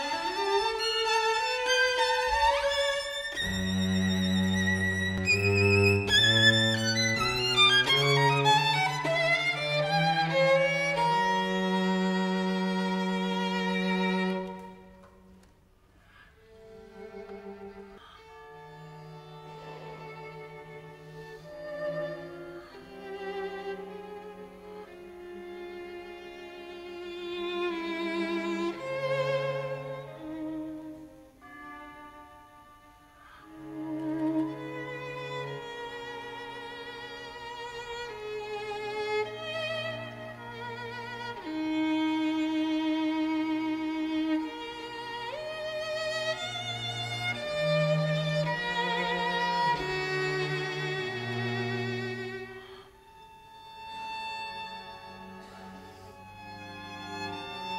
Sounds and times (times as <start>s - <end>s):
Orchestra: 0.0s - 57.7s
String section: 0.0s - 57.7s
Violin, fiddle: 0.0s - 57.7s.